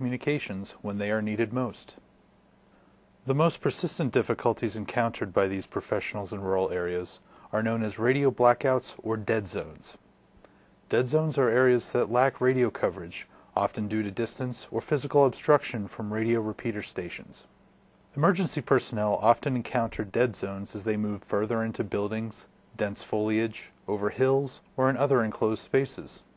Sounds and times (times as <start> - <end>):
Speech: 0.0 - 2.1, 3.2 - 10.0, 10.9 - 17.5, 18.1 - 26.3.